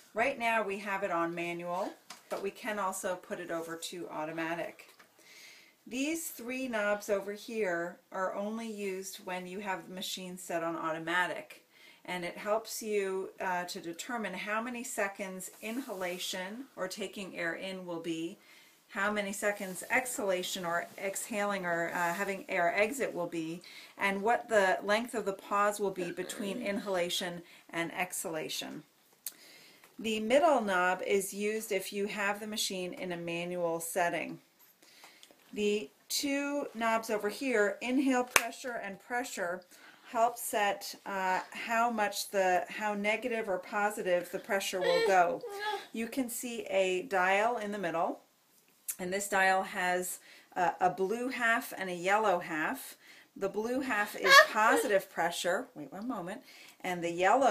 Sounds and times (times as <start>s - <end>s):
Speech: 0.2s - 4.9s, 5.9s - 28.8s, 30.0s - 34.4s, 35.6s - 48.2s, 48.9s - 57.5s.